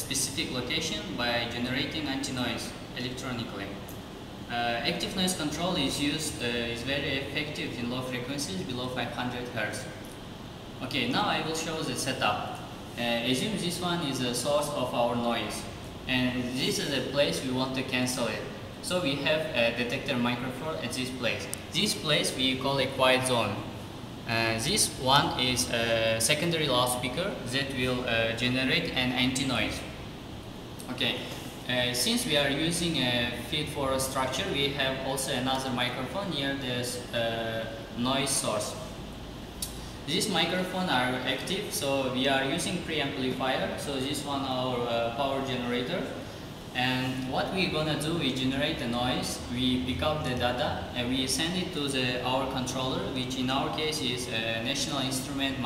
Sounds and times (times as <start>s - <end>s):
Speech: 0.0s - 3.8s, 4.5s - 10.0s, 10.8s - 30.0s, 30.8s - 39.0s, 40.1s - 55.6s.